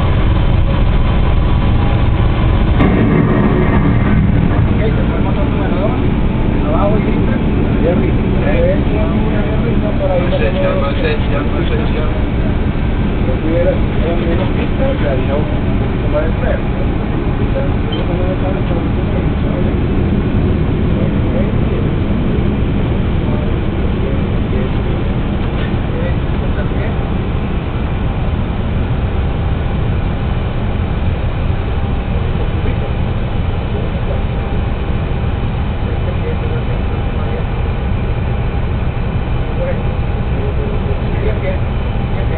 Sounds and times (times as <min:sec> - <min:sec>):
Vehicle: 0:00.0 - 0:42.3
Speech: 0:04.6 - 0:20.0, 0:20.8 - 0:22.0, 0:23.2 - 0:27.2, 0:32.1 - 0:34.5, 0:35.8 - 0:37.8, 0:39.5 - 0:42.3.